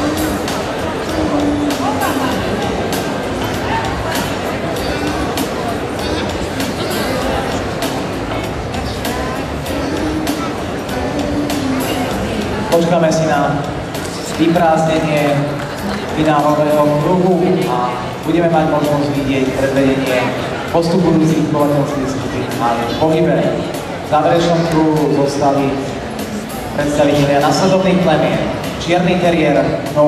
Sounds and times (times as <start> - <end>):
Music: 0.0 - 30.0
Speech: 0.0 - 30.0.